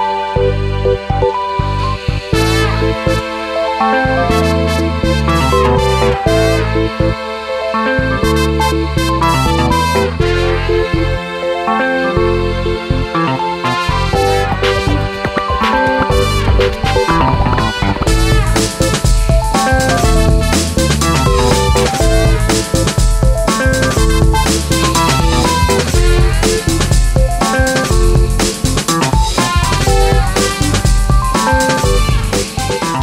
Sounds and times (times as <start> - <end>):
Music: 0.0 - 33.0.